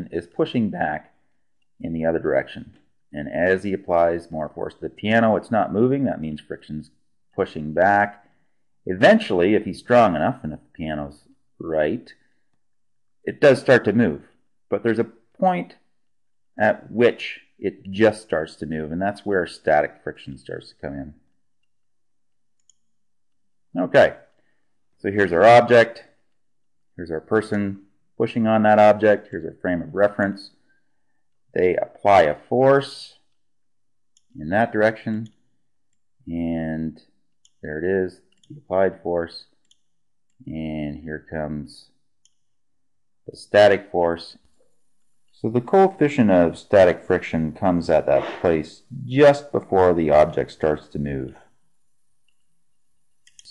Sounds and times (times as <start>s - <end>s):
Speech: 0.0s - 1.2s, 1.8s - 8.2s, 8.8s - 12.2s, 13.2s - 15.9s, 16.6s - 21.3s, 23.7s - 24.3s, 25.0s - 26.2s, 27.0s - 30.6s, 31.5s - 33.3s, 34.4s - 35.4s, 36.2s - 39.6s, 40.4s - 42.0s, 43.3s - 44.4s, 45.4s - 51.5s.